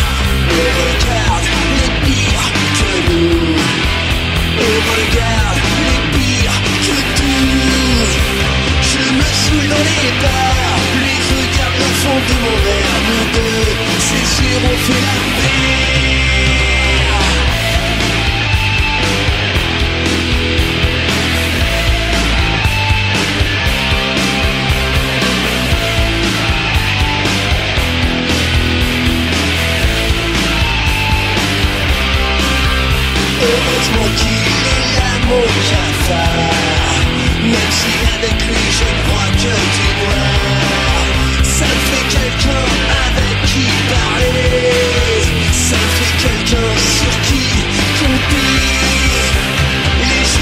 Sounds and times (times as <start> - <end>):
Music: 0.0 - 50.4.